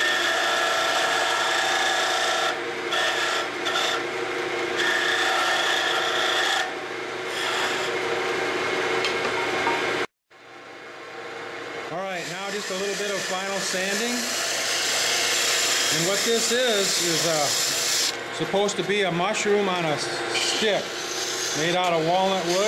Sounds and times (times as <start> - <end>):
Speech: 11.9 - 14.3, 15.9 - 17.6, 18.4 - 20.9, 21.6 - 22.6.